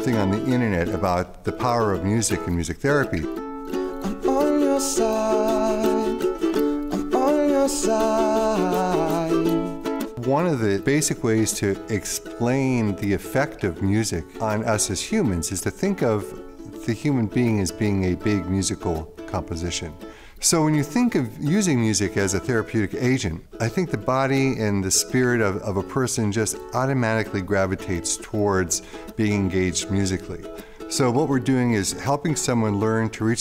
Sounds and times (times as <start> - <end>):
Speech: 0.0 - 3.4, 10.2 - 33.4
Music: 0.0 - 33.4.